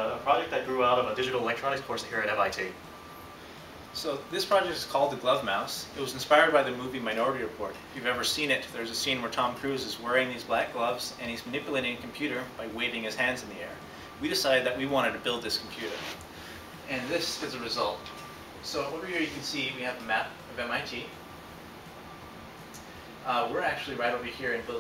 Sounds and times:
Speech: 0.0 - 2.8, 4.0 - 16.2, 16.9 - 21.2, 23.2 - 24.8.

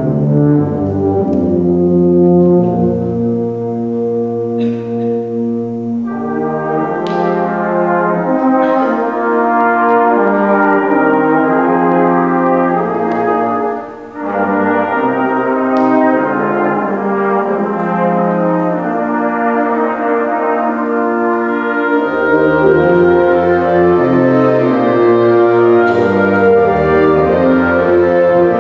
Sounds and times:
Music: 0.0 - 28.6.

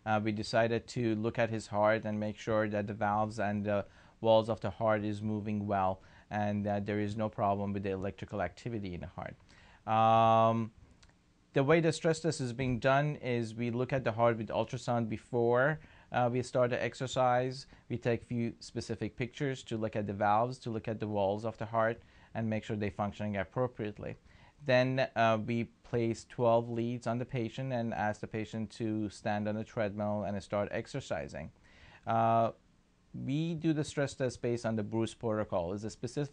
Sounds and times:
Speech: 0.0 - 10.8, 11.6 - 32.6, 33.2 - 36.3.

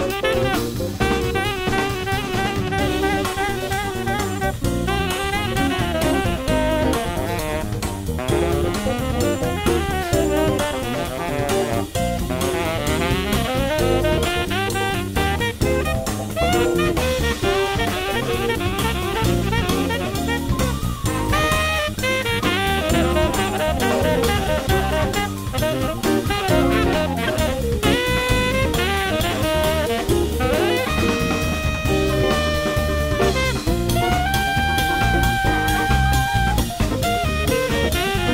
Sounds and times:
Brass instrument: 0.0 - 38.3
Saxophone: 0.0 - 38.3.

